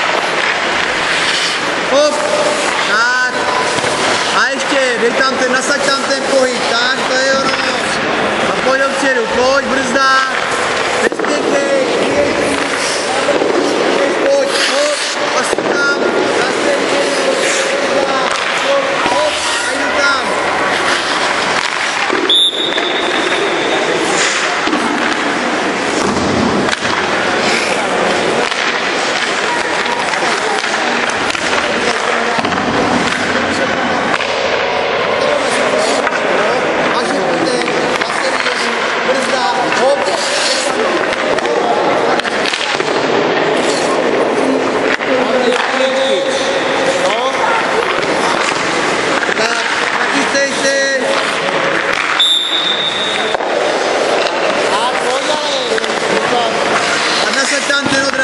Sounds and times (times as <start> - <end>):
Firecracker: 0.0 - 58.2
Speech: 4.3 - 10.4, 11.0 - 20.4, 35.2 - 42.5, 44.9 - 48.6, 49.3 - 51.4, 54.6 - 58.2.